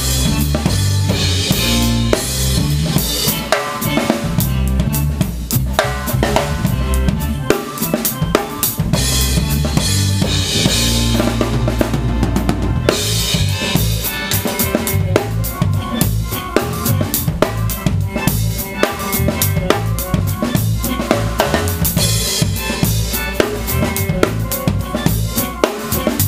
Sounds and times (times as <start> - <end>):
Drum: 0.0 - 26.2
Drum kit: 0.0 - 26.2
Dance music: 6.2 - 26.2.